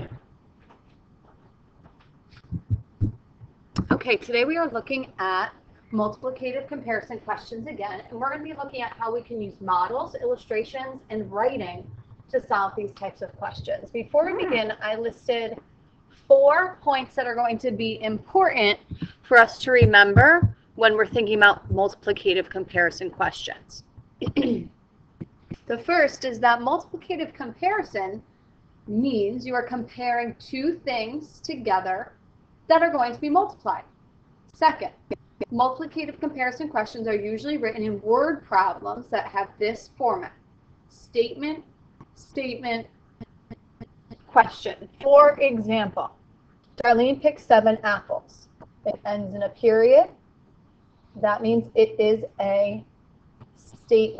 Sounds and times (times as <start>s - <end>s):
Speech: 0.0s - 0.2s, 3.8s - 15.6s, 16.3s - 24.7s, 25.6s - 28.2s, 28.9s - 32.1s, 32.7s - 33.9s, 34.6s - 40.4s, 41.0s - 42.9s, 44.2s - 46.1s, 46.8s - 50.2s, 51.2s - 52.8s, 53.7s - 54.2s.